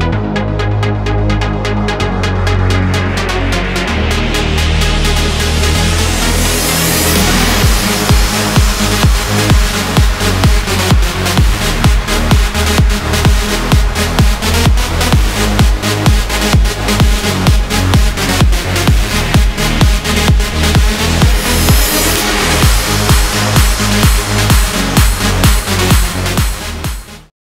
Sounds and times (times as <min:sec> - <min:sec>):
Music: 0:00.0 - 0:27.3.